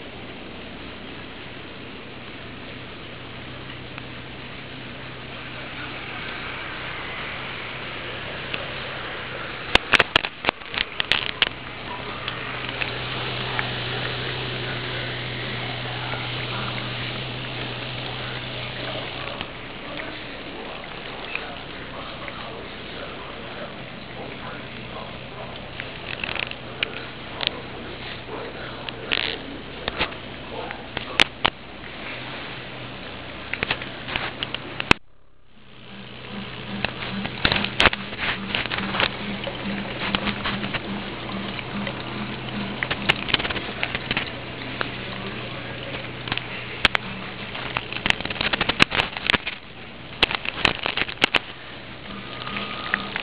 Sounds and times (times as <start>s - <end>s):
Speech: 18.0s - 25.9s, 26.6s - 31.3s, 44.8s - 47.6s.